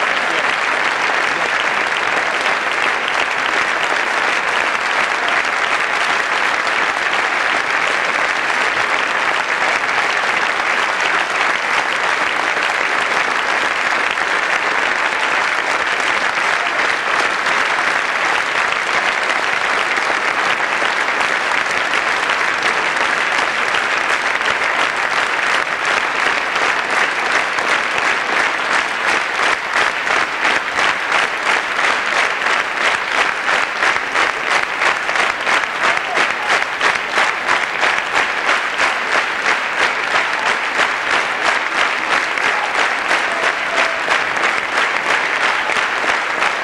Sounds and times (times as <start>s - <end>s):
Applause: 0.0s - 46.6s.